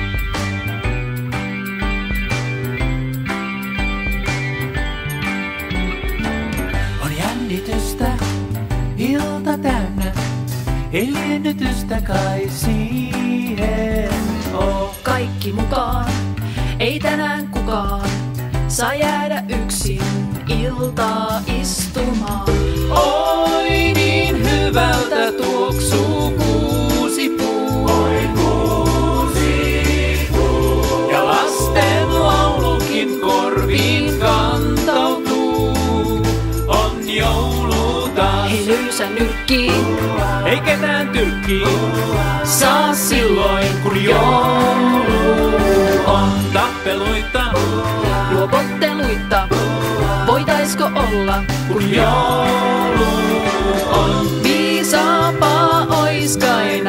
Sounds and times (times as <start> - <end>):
Music: 0.0 - 56.8.